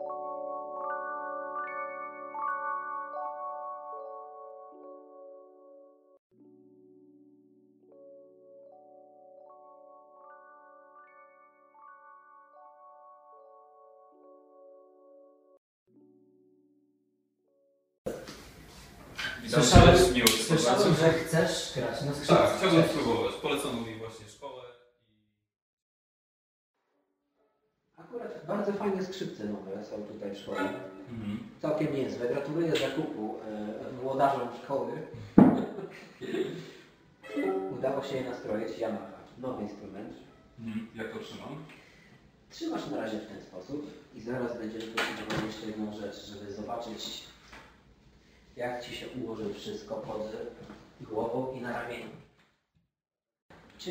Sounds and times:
Speech: 19.2s - 24.7s, 28.0s - 35.1s, 37.3s - 41.7s, 42.5s - 47.4s, 48.6s - 52.2s.

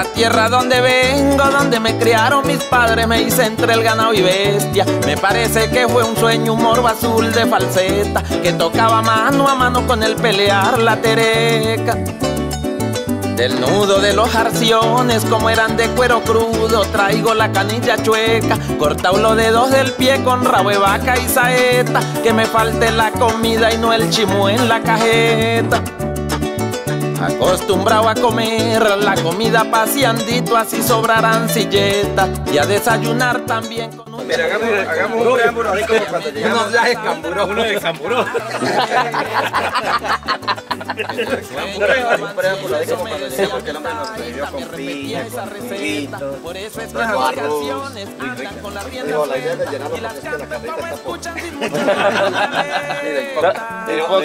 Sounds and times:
Music: 0.0s - 54.2s.

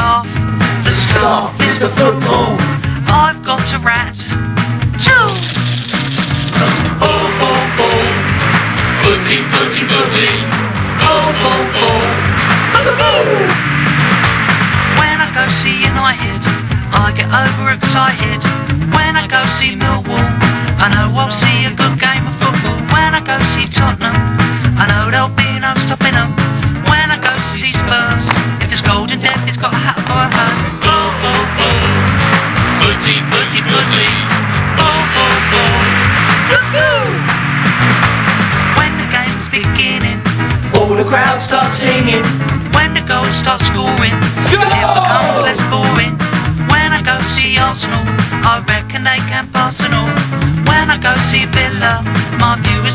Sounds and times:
Funny music: 0.0s - 52.9s.

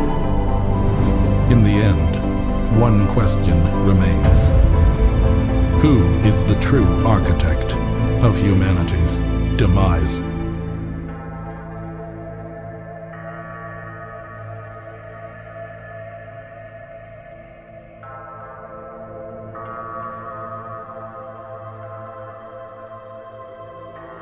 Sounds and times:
Music: 0.0s - 24.2s
Speech: 1.5s - 4.6s, 5.8s - 10.3s.

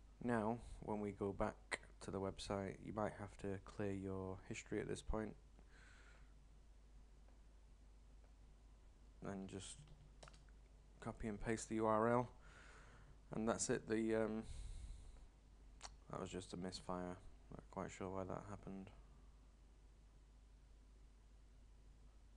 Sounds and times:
Speech: 0.2s - 5.4s, 9.2s - 9.9s, 11.0s - 12.4s, 13.3s - 14.5s, 15.8s - 19.0s.

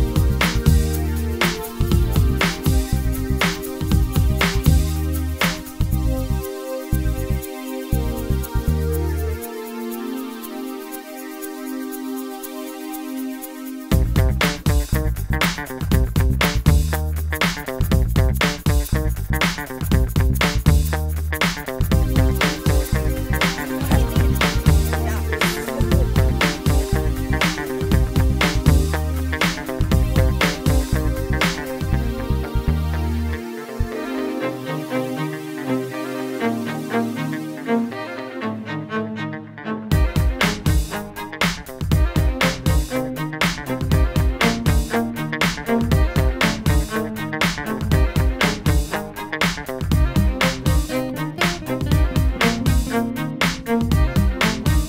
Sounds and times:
Music: 0.0s - 54.8s.

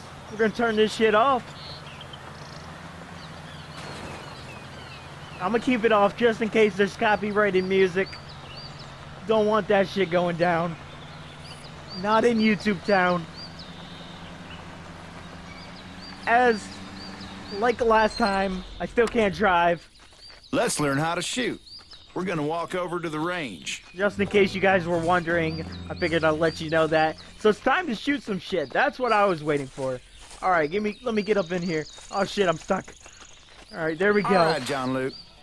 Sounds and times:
Speech: 0.3s - 1.5s, 5.4s - 8.2s, 9.2s - 10.8s, 11.9s - 13.3s, 16.2s - 16.8s, 17.4s - 19.9s, 20.5s - 21.6s, 22.2s - 33.0s, 33.7s - 35.2s.

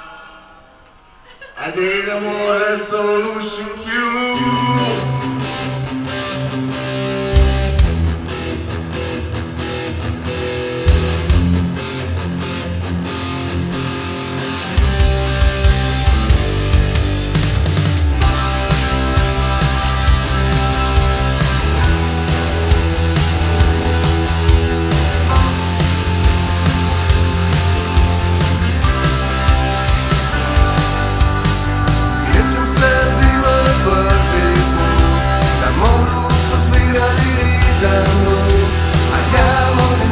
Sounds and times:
Pop music: 18.0s - 40.1s.

